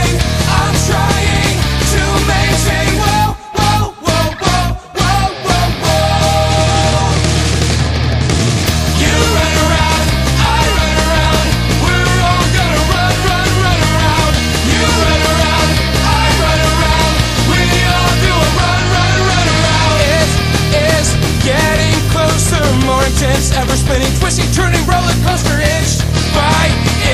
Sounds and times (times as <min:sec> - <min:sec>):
Music: 0:00.0 - 0:27.1.